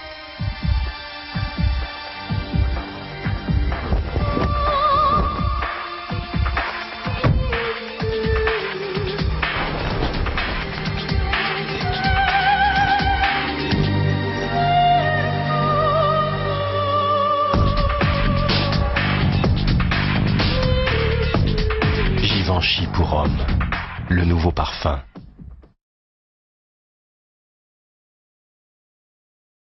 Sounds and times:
Music: 0.0s - 25.8s
Speech: 22.2s - 23.4s, 24.1s - 25.1s.

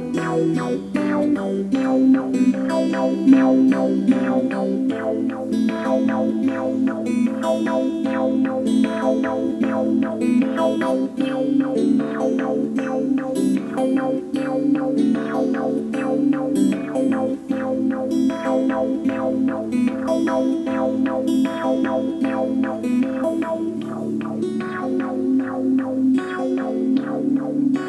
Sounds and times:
Strum: 0.0s - 27.8s.

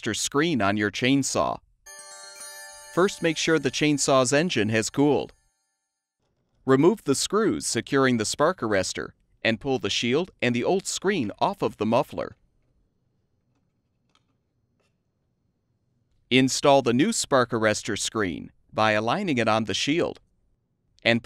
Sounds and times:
Speech: 0.0s - 1.6s, 3.0s - 5.3s, 6.7s - 12.4s, 16.3s - 20.2s, 21.0s - 21.2s.

